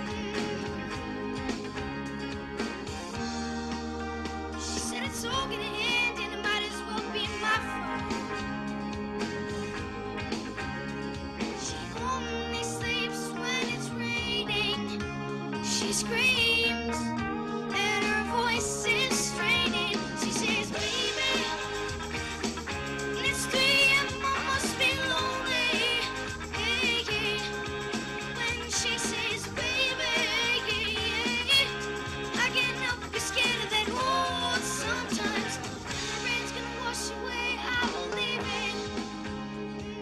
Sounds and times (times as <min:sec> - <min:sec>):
Music: 0:00.0 - 0:40.0
Child singing: 0:04.6 - 0:07.9, 0:11.6 - 0:15.0, 0:15.6 - 0:17.0, 0:17.7 - 0:22.1, 0:23.1 - 0:27.6, 0:28.2 - 0:39.0.